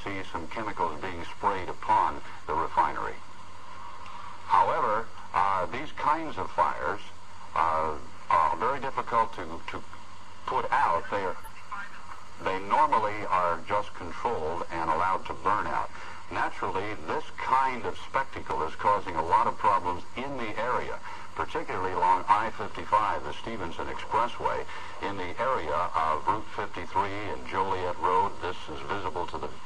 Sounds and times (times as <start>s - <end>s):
Speech: 0.0s - 3.2s, 4.5s - 9.8s, 10.5s - 29.6s.